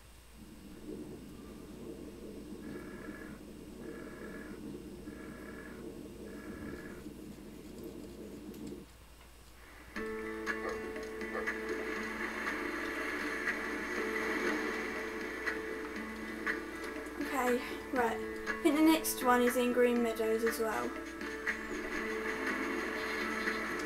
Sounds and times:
Music: 9.9 - 23.8
Speech: 17.2 - 20.9.

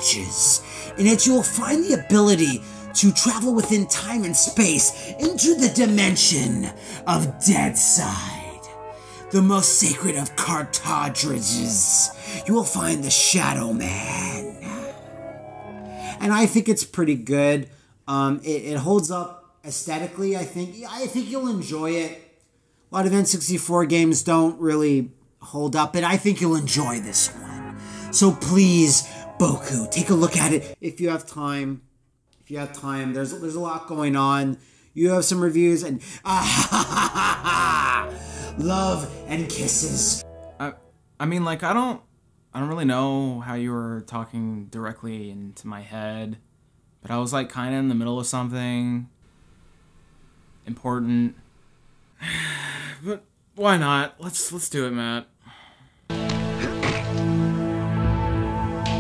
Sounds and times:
Male speech, man speaking: 0.0 - 8.7, 9.3 - 14.8, 16.2 - 22.3, 23.0 - 31.8, 32.5 - 36.6, 38.5 - 42.0, 42.6 - 46.4, 47.0 - 49.1, 50.7 - 51.4, 53.0 - 55.3
Music: 0.0 - 16.6, 26.3 - 30.8, 36.3 - 41.4, 56.1 - 59.0.

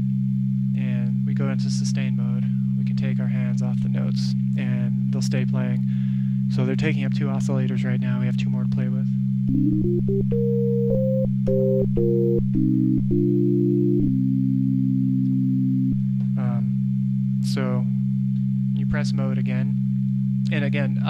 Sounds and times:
Speech: 0.8 - 5.9, 6.5 - 9.2, 16.3 - 16.8, 17.4 - 18.0, 18.8 - 19.8, 20.5 - 21.1
Electronic music: 9.5 - 16.4
Sampler: 9.5 - 16.4.

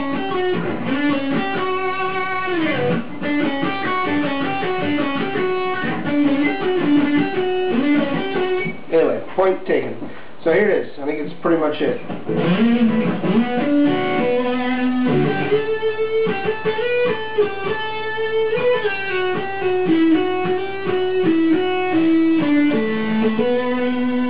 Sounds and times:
Electric guitar: 0.0 - 8.9, 12.0 - 24.2
Speech: 8.9 - 12.1.

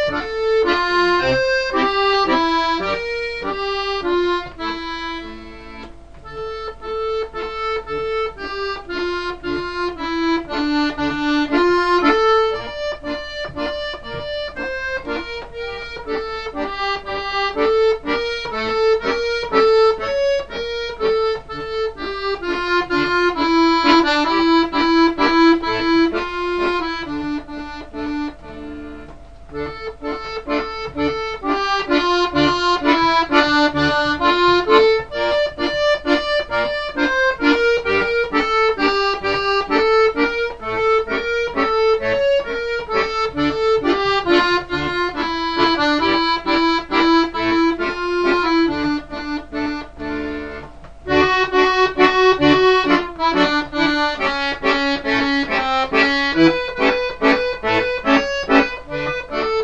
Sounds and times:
Accordion: 0.0 - 59.6.

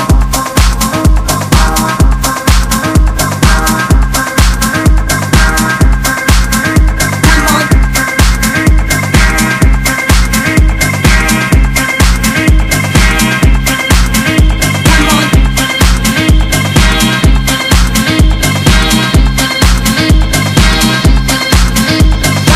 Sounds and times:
Music: 0.0 - 22.5.

